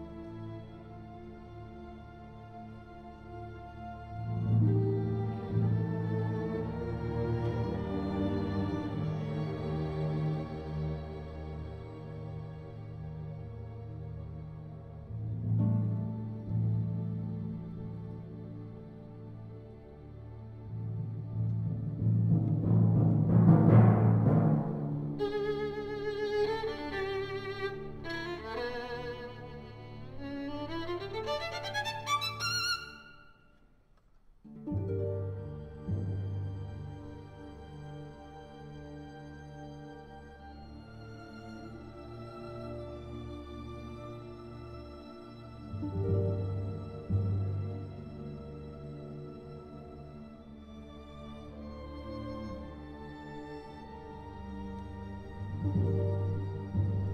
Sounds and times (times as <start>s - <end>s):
Violin, fiddle: 0.0s - 21.6s, 25.2s - 33.4s, 34.8s - 57.1s.